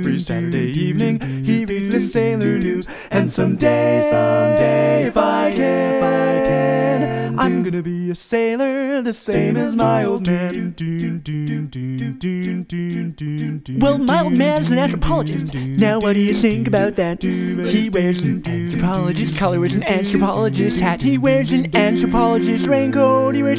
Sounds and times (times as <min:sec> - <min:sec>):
A capella: 0:00.0 - 0:23.5
Singing: 0:00.0 - 0:23.5.